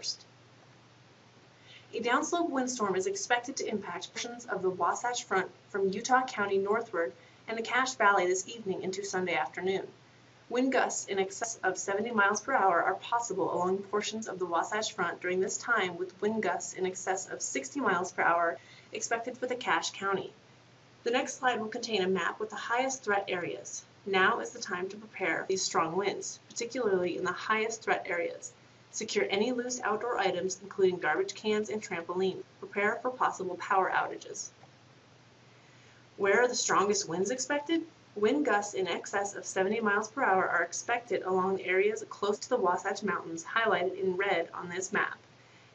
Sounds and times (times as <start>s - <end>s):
Speech: 0.0s - 0.2s, 1.9s - 20.4s, 21.1s - 34.6s, 36.2s - 45.2s.